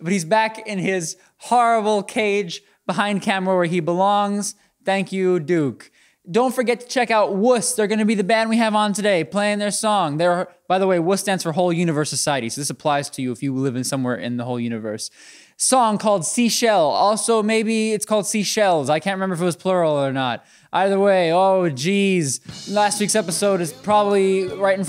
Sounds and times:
Speech: 0.0 - 24.8.

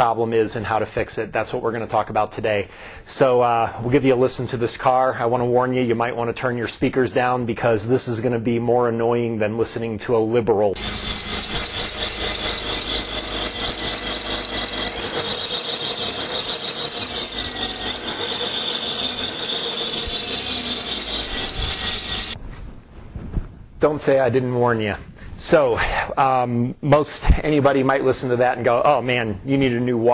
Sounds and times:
Speech: 0.0 - 10.8, 23.8 - 30.1.

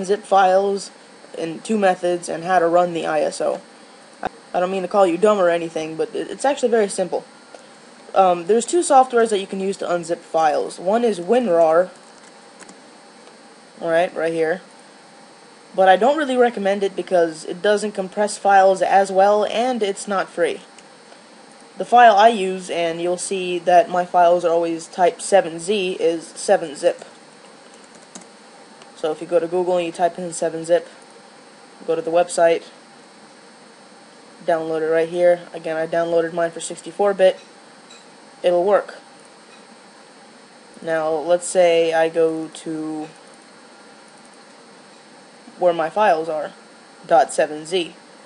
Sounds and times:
Speech: 0.0 - 3.6, 4.5 - 7.3, 8.1 - 12.0, 13.8 - 14.7, 15.8 - 20.7, 21.8 - 27.1, 29.0 - 31.0, 31.8 - 32.8, 34.4 - 37.4, 38.4 - 39.1, 40.8 - 43.2, 45.5 - 48.0.

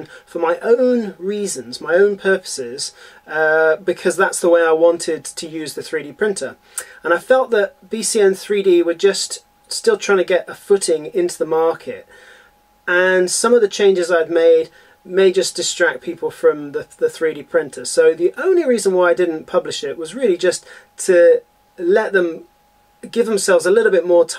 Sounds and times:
Speech: 0.0 - 12.1, 12.9 - 24.3.

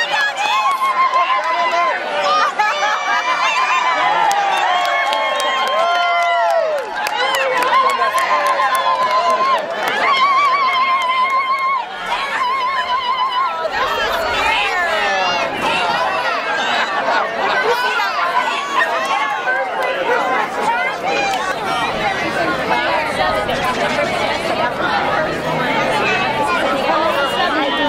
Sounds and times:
Speech: 7.0 - 27.8.

